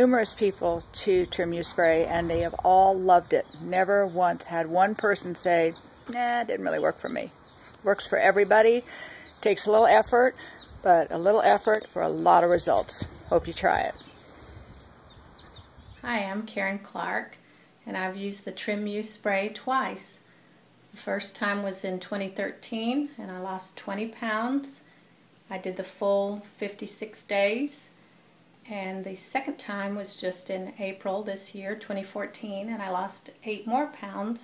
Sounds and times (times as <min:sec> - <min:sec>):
Speech: 0:00.0 - 0:14.0, 0:16.0 - 0:20.2, 0:21.0 - 0:24.8, 0:25.5 - 0:27.9, 0:28.7 - 0:34.4.